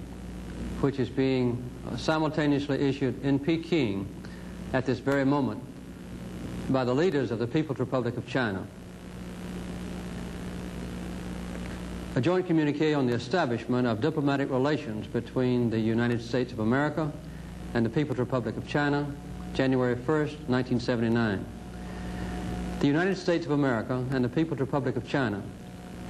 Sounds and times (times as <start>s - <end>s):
Narration, monologue: 0.0s - 26.1s
Male speech, man speaking: 0.8s - 4.1s, 4.7s - 5.7s, 6.7s - 8.7s, 12.2s - 17.2s, 17.8s - 21.5s, 22.8s - 25.6s.